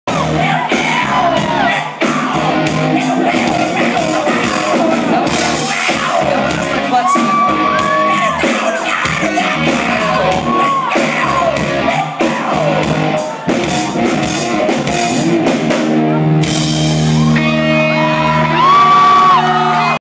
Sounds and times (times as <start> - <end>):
Music: 0.1 - 20.0
Male singing: 0.2 - 12.9.